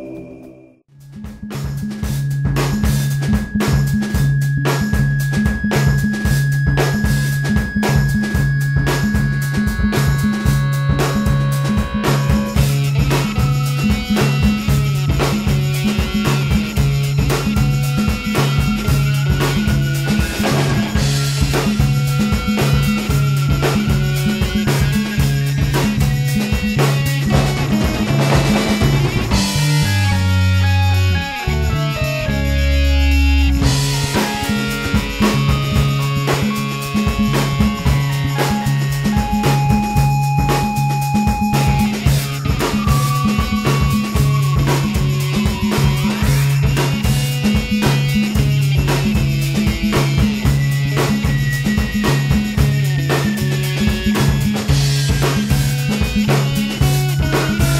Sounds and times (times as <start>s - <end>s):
Music: 0.0s - 57.8s.